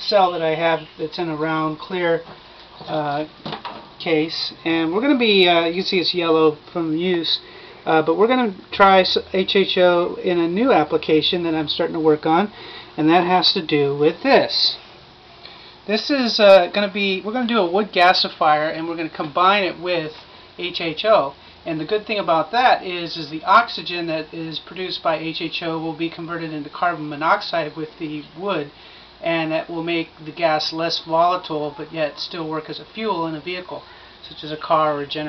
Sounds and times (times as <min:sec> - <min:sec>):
Speech: 0:00.0 - 0:03.4, 0:04.0 - 0:14.8, 0:15.9 - 0:35.2.